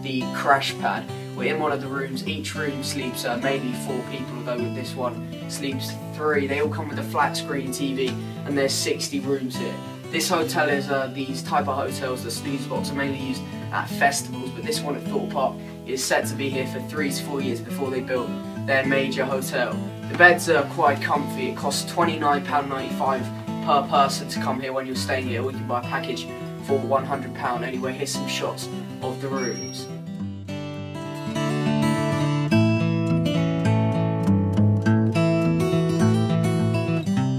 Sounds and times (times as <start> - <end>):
Speech: 0.0 - 29.9
Music: 0.0 - 37.3.